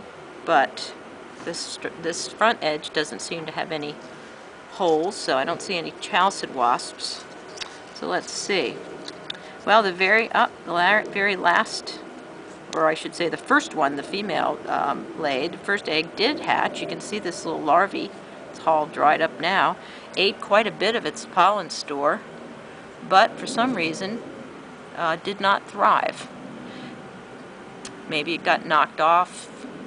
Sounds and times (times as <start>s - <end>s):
Speech: 0.5s - 4.0s, 4.7s - 7.3s, 8.0s - 8.8s, 9.6s - 12.0s, 12.7s - 22.2s, 23.0s - 24.2s, 25.0s - 26.3s, 28.0s - 29.6s.